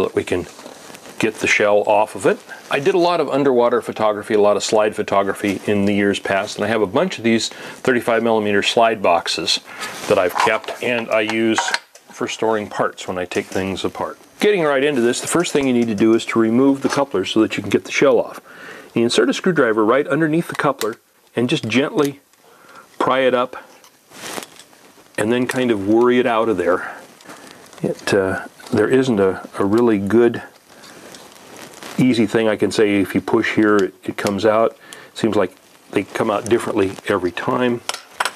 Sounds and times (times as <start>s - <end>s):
Speech: 0.0s - 0.6s, 1.2s - 22.3s, 23.0s - 23.7s, 25.2s - 27.0s, 27.8s - 30.6s, 32.0s - 37.9s.